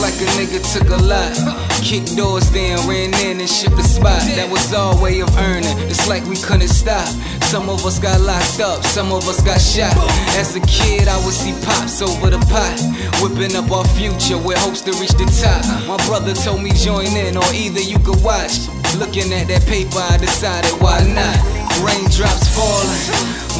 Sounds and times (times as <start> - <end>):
Music: 0.0 - 23.5.